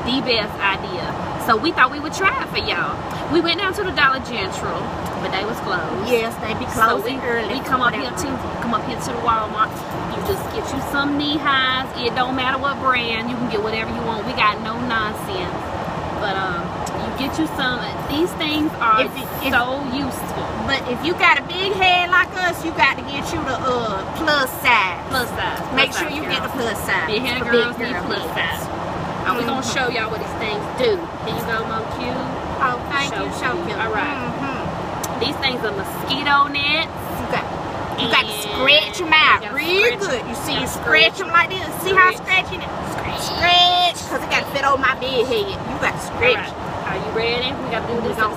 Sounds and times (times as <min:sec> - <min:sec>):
Speech: 0:00.0 - 0:15.6, 0:16.2 - 0:48.3.